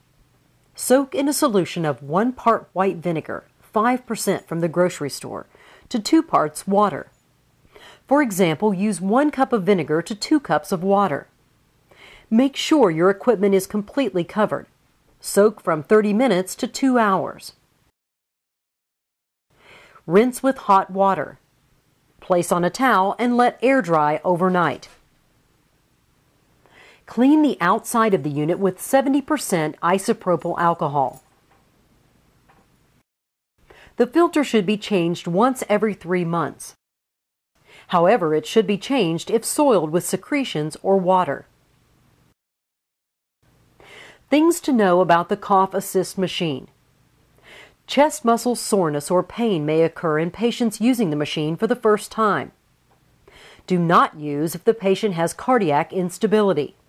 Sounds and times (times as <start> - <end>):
Speech: 0.8 - 7.1, 8.1 - 11.3, 12.3 - 17.6, 20.0 - 21.4, 22.2 - 25.0, 27.1 - 31.2, 34.0 - 36.8, 37.9 - 41.5, 44.3 - 46.8, 47.9 - 52.6, 53.7 - 56.8.